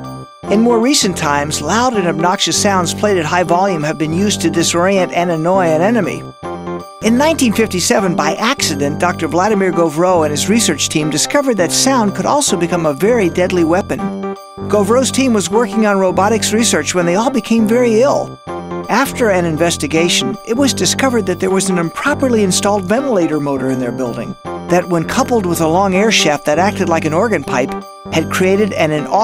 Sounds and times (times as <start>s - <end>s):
Music: 0.0s - 29.2s
Speech: 0.5s - 6.2s, 7.0s - 14.1s, 14.7s - 18.3s, 18.9s - 29.2s.